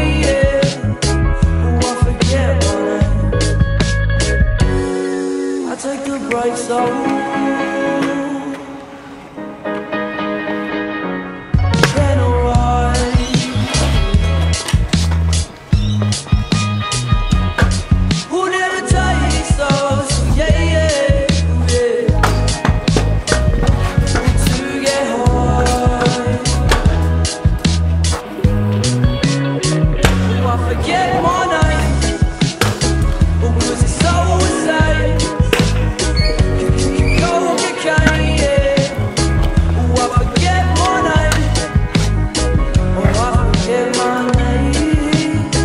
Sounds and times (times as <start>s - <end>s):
Skateboard: 13.0s - 18.2s, 22.2s - 29.4s, 30.0s - 34.8s, 35.4s - 42.2s.